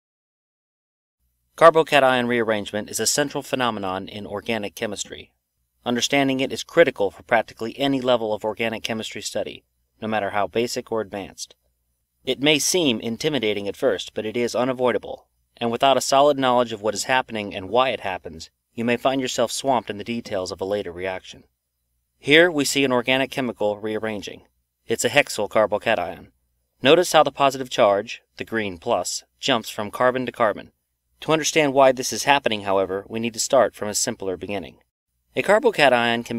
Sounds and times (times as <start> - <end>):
Narration, monologue: 1.2 - 36.3.